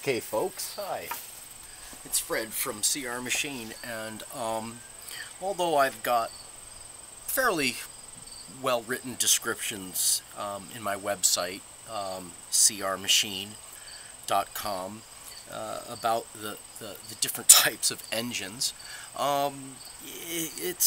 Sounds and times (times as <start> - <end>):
Speech: 0.0 - 1.2, 2.0 - 4.8, 5.4 - 6.3, 7.3 - 7.9, 8.5 - 13.6, 14.3 - 20.8.